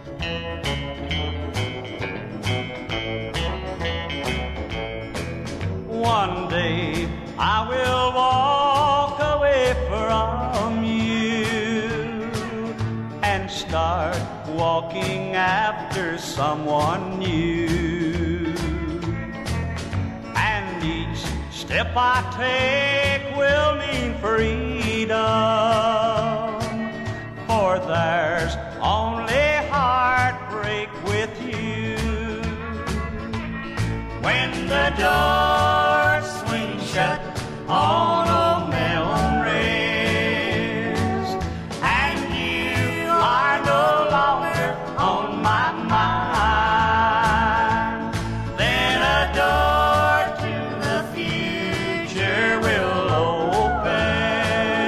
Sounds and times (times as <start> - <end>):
Music: 0.0 - 54.8.